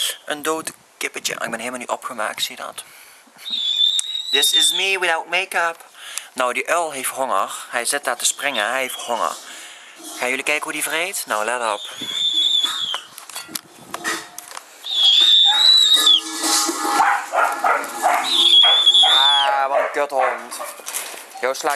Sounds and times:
Speech: 0:00.3 - 0:02.8, 0:04.4 - 0:05.8, 0:06.4 - 0:09.4, 0:10.2 - 0:11.8, 0:19.2 - 0:20.7, 0:21.4 - 0:21.7.

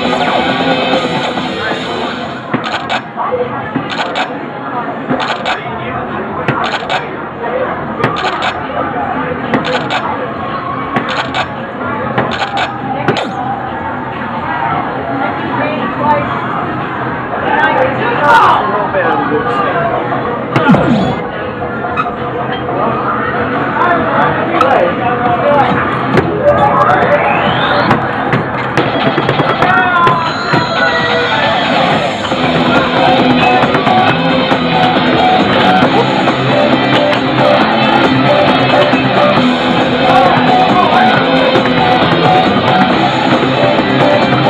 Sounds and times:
Speech: 0:02.9 - 0:28.4.

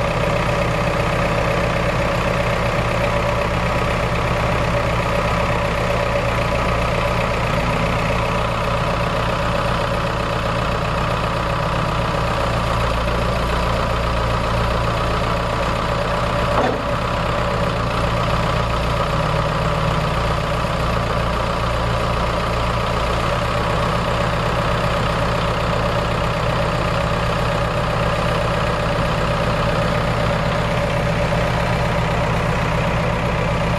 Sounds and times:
Vehicle: 0:00.0 - 0:33.7.

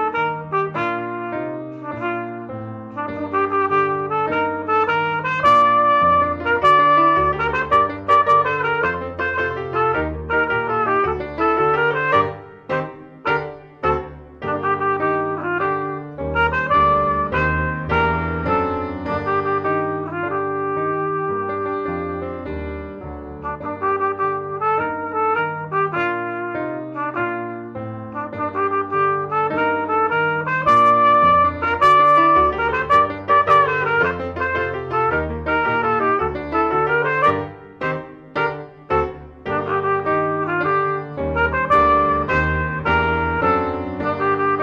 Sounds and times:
Trumpet: 0:00.0 - 0:44.6.

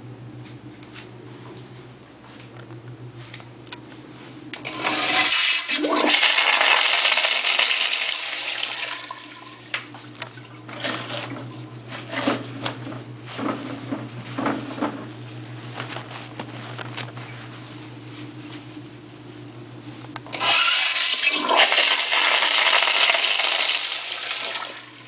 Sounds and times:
Toilet flush: 0:04.6 - 0:09.8, 0:10.4 - 0:12.5, 0:20.3 - 0:25.0.

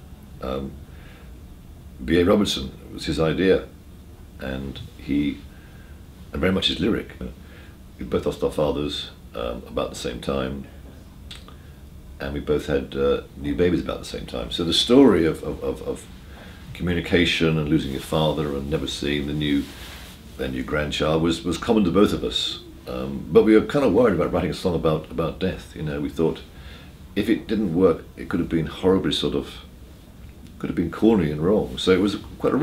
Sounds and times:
Speech: 0:00.4 - 0:00.8, 0:02.0 - 0:03.8, 0:04.4 - 0:05.5, 0:06.3 - 0:07.4, 0:08.0 - 0:11.5, 0:12.2 - 0:19.8, 0:20.4 - 0:26.5, 0:27.2 - 0:29.7, 0:30.5 - 0:32.6.

